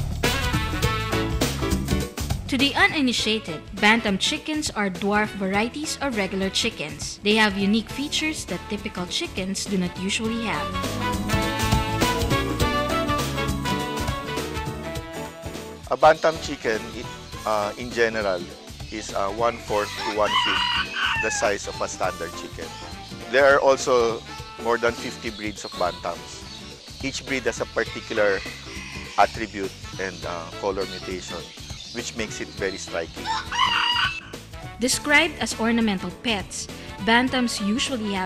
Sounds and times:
Music: 0:00.0 - 0:38.2
Speech: 0:02.5 - 0:10.7, 0:15.9 - 0:20.6, 0:21.2 - 0:22.7, 0:23.3 - 0:26.4, 0:27.0 - 0:28.4, 0:29.2 - 0:33.1, 0:34.8 - 0:38.2
Chicken, rooster: 0:20.0 - 0:21.3, 0:33.2 - 0:34.3.

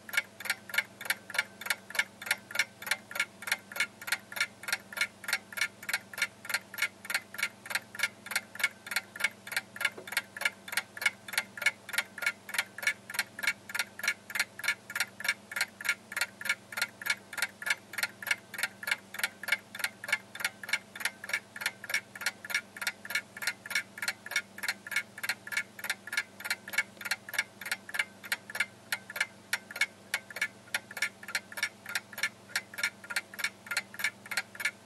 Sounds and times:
Tick-tock: 0:00.0 - 0:34.8.

